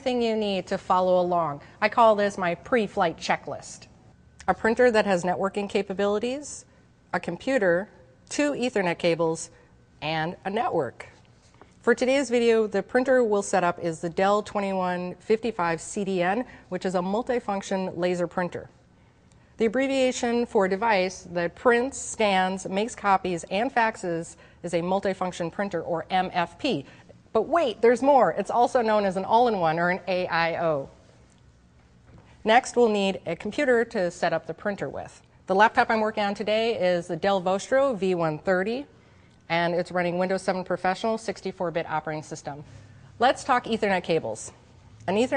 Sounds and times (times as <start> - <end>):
Speech: 0.0 - 11.2, 11.8 - 18.7, 19.6 - 31.0, 32.4 - 38.9, 39.5 - 45.3.